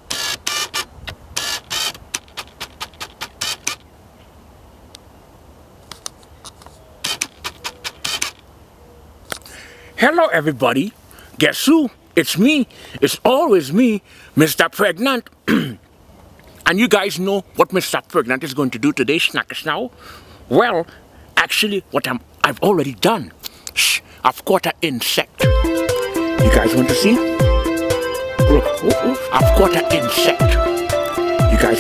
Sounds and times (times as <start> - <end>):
Speech: 10.0 - 15.3, 16.6 - 19.9, 20.5 - 25.3, 26.4 - 27.2, 28.5 - 30.6, 31.5 - 31.8
Music: 25.4 - 31.8.